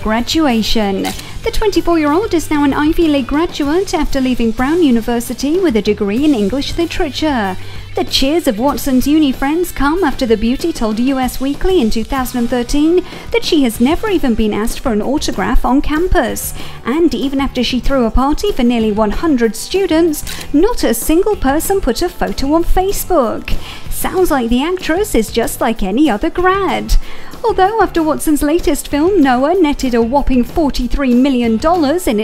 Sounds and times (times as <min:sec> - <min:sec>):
Music: 0:00.0 - 0:32.2
Speech: 0:00.0 - 0:32.2.